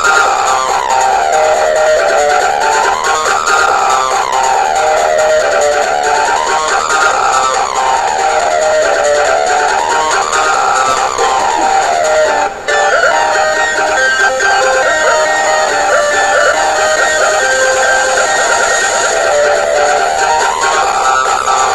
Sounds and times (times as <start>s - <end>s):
Music: 0.0s - 21.7s.